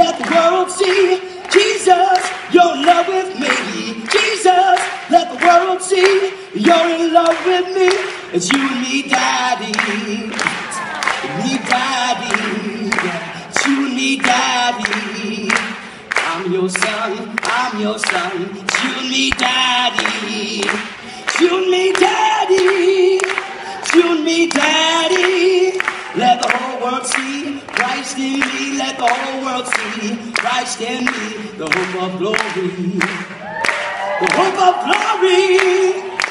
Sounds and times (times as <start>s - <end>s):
Male singing: 0.0s - 33.4s, 34.2s - 36.3s.